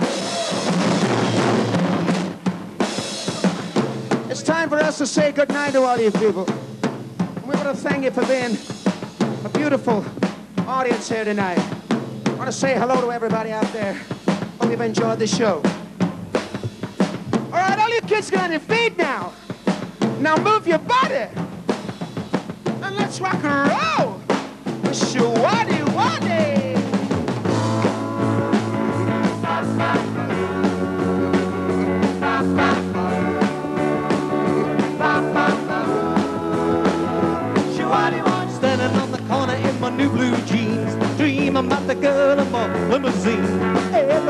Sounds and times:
Rock and roll: 0.0 - 44.2.

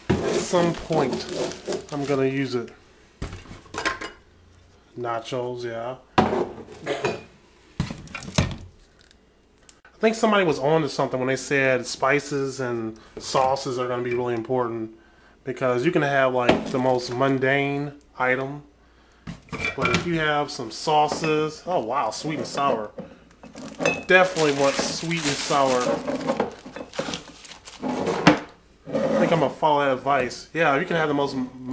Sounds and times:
Speech: 0.3 - 2.8, 5.0 - 6.1, 10.0 - 18.7, 19.7 - 23.0, 24.1 - 26.1, 29.1 - 31.7.

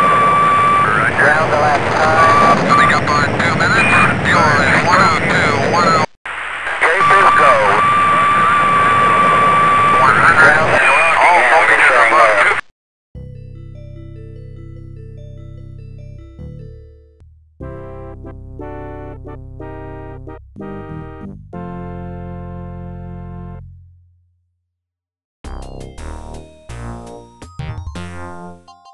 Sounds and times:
Speech: 0.8 - 6.1, 6.8 - 7.8, 10.0 - 12.6.

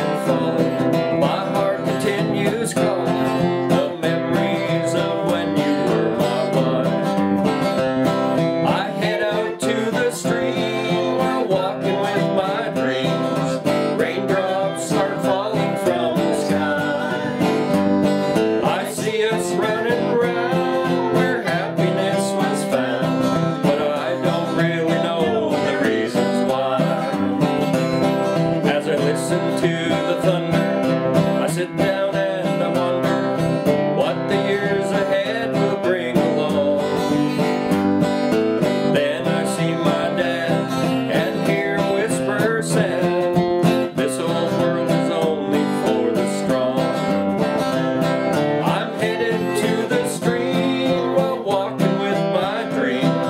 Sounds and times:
Bluegrass: 0.0 - 53.3.

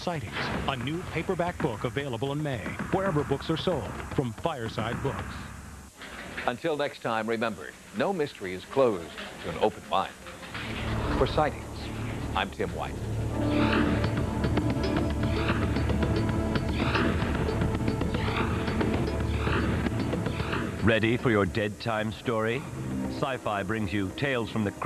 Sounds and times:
Speech: 0.0 - 5.5, 6.4 - 10.2, 12.4 - 13.0, 20.8 - 24.8
Television: 0.0 - 24.8
Music: 10.6 - 24.8.

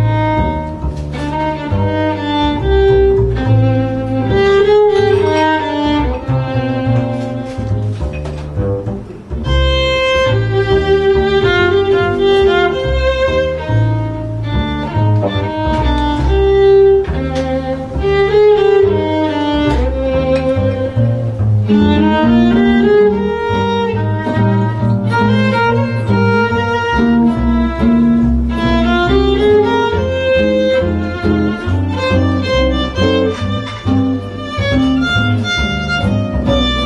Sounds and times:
Violin, fiddle: 0.0 - 8.0, 9.4 - 36.8.

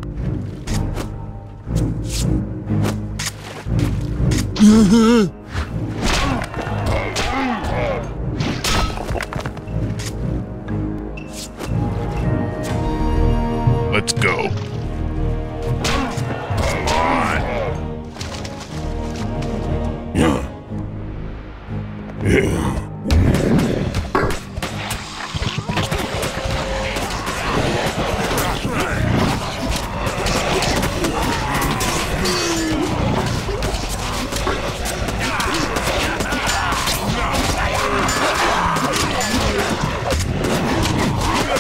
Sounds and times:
Music: 0.0 - 41.6.

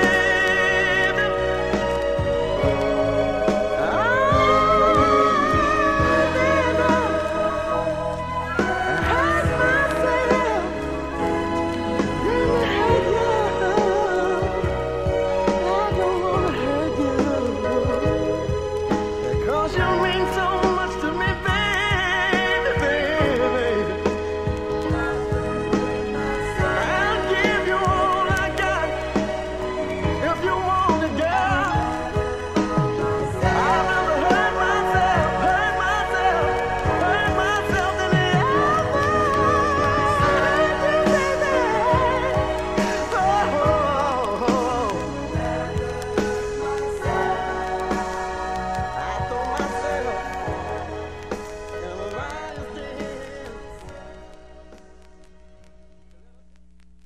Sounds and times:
Soul music: 0.0 - 57.0.

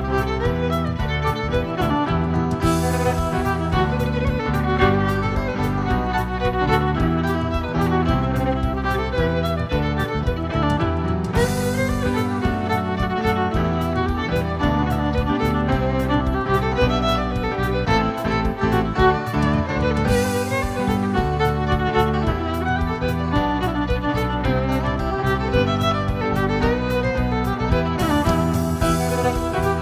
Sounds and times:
Steel guitar, slide guitar: 0.0 - 29.8.

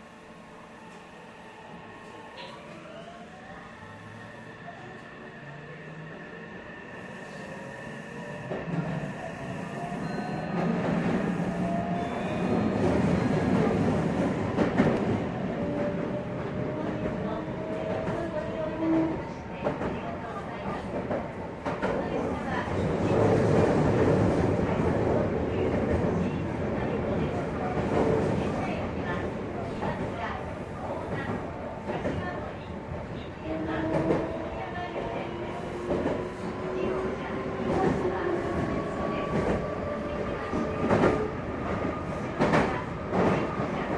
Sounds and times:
Train: 0.0 - 43.9
Speech: 16.7 - 21.2, 21.9 - 23.4, 25.2 - 35.6, 36.6 - 41.3, 42.3 - 43.9.

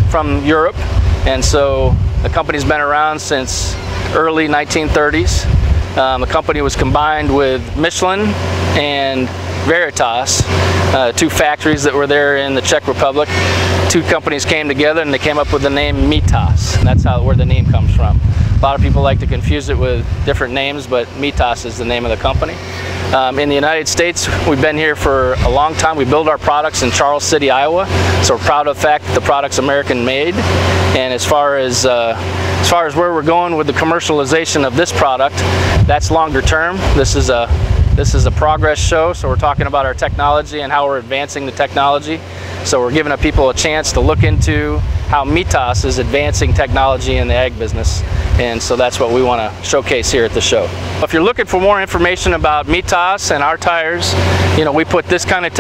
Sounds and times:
Outside, urban or manmade: 0.0 - 55.6
Speech: 0.0 - 55.6
Vehicle: 0.0 - 55.6.

